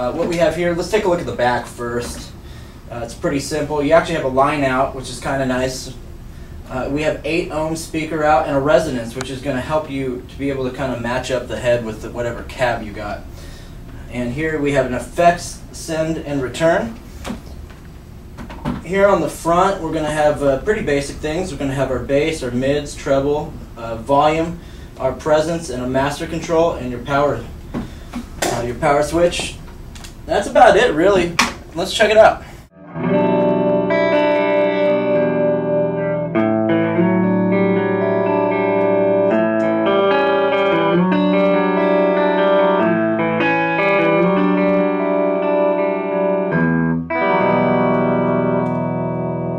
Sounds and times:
Speech: 0.0 - 6.0, 6.7 - 13.2, 14.0 - 17.0, 18.8 - 27.5, 28.4 - 29.6, 30.3 - 32.5.

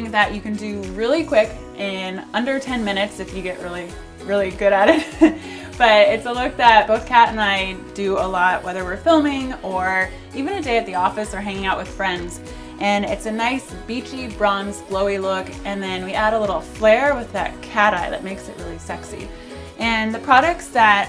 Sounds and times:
Speech: 0.0 - 4.9, 5.8 - 21.0
Music: 0.0 - 21.0.

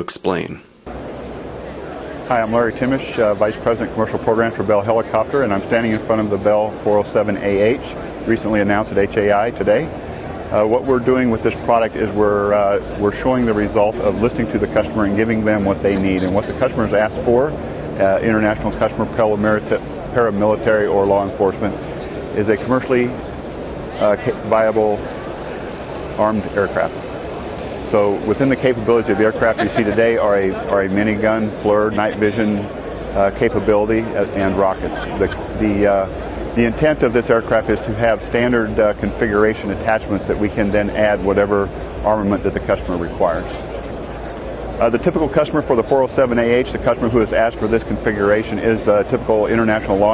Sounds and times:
Speech: 0.0 - 0.7, 2.3 - 9.9, 10.5 - 21.8, 22.4 - 23.2, 24.0 - 25.0, 26.2 - 26.9, 27.9 - 43.6, 44.8 - 50.1.

